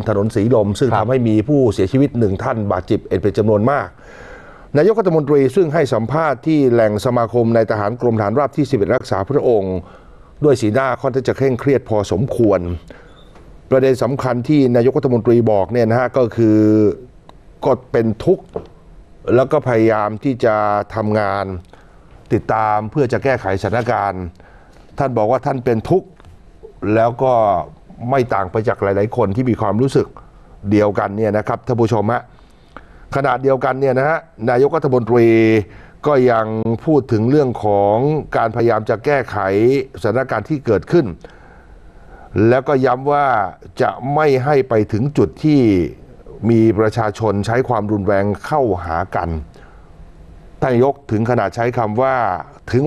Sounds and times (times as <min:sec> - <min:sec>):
Speech: 0:00.0 - 0:04.0, 0:04.7 - 0:12.9, 0:13.7 - 0:18.6, 0:19.3 - 0:21.7, 0:22.3 - 0:24.4, 0:25.0 - 0:32.3, 0:33.1 - 0:41.2, 0:42.4 - 0:49.5, 0:50.6 - 0:52.8.